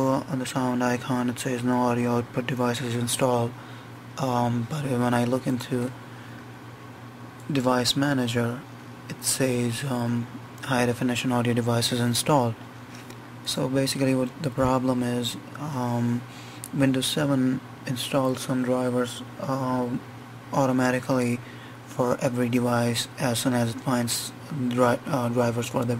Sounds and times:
Speech: 0.0s - 3.6s, 4.2s - 6.0s, 7.4s - 12.6s, 13.4s - 25.9s.

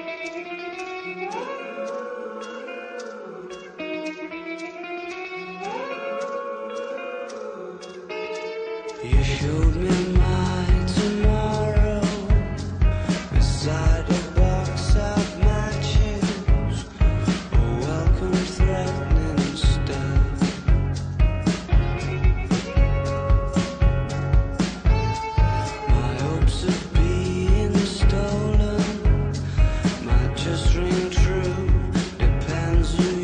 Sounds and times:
Grunge: 0.0s - 33.2s.

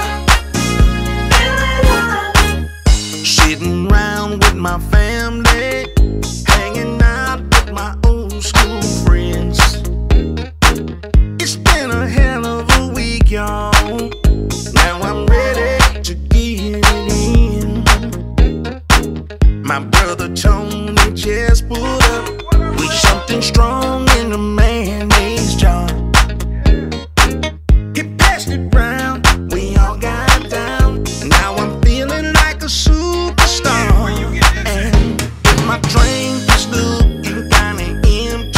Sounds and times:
Music: 0.0s - 38.5s.

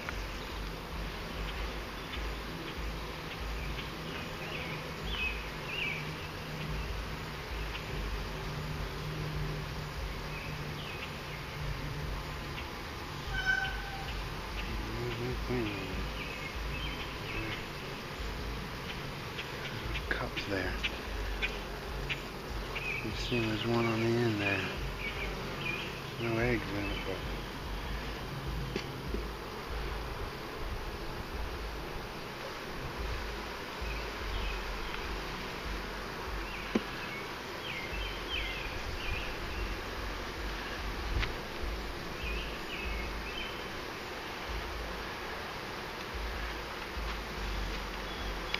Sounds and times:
Bee, wasp, etc.: 0.0s - 48.5s
Fly, housefly: 0.0s - 48.5s.

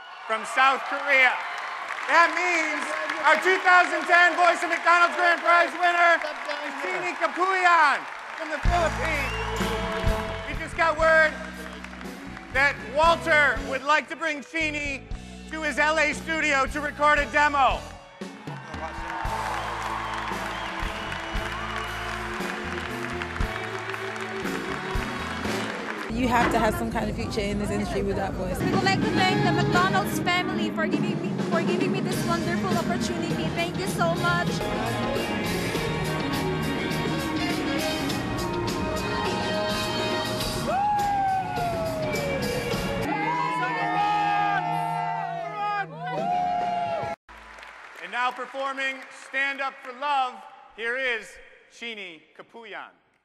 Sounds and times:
Music: 2.0s - 47.7s.

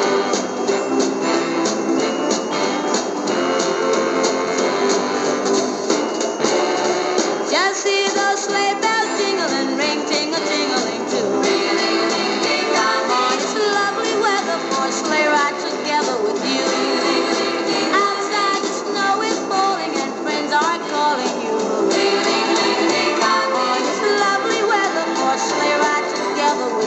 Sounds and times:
Music: 0.0s - 26.8s
Synthetic singing: 7.5s - 26.8s.

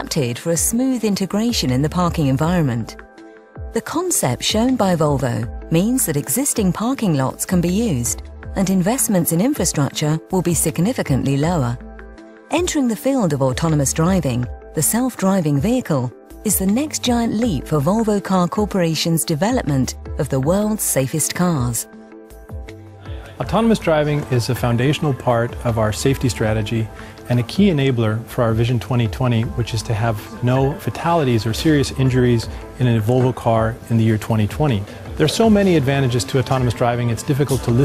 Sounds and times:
Speech: 0.0s - 3.0s, 3.8s - 11.8s, 12.5s - 21.9s, 23.4s - 37.8s
Music: 0.0s - 37.8s.

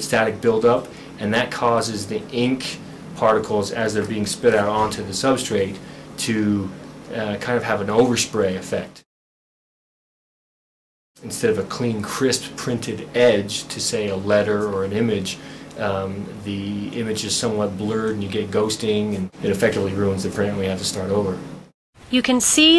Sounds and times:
Speech: 0.0s - 9.1s, 11.2s - 21.5s, 22.1s - 22.7s.

